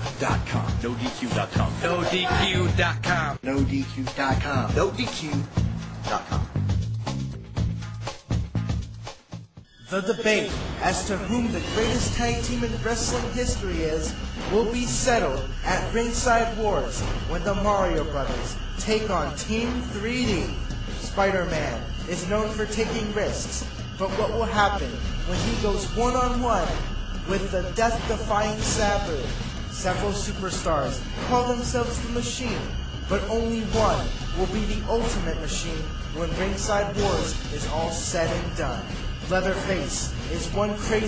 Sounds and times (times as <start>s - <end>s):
Speech: 0.1s - 5.5s, 6.1s - 6.5s, 9.9s - 20.6s, 21.2s - 41.0s.